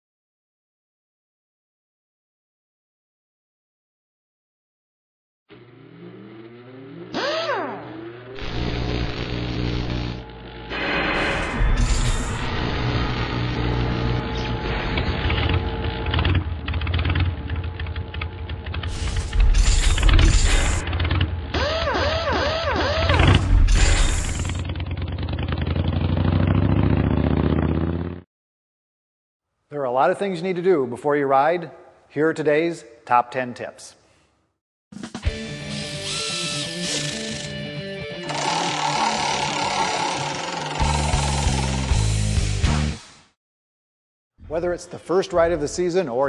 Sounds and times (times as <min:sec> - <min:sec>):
Motor vehicle (road): 0:05.5 - 0:08.4, 0:24.3 - 0:28.2.